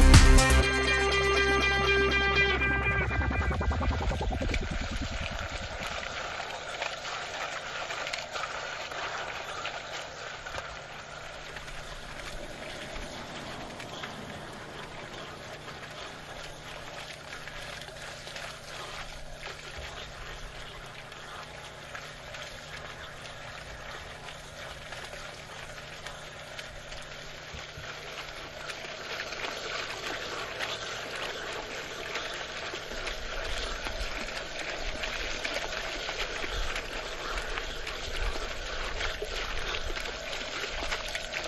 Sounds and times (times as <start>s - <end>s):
Stream: 2.0s - 41.4s
Gurgling: 2.8s - 26.3s.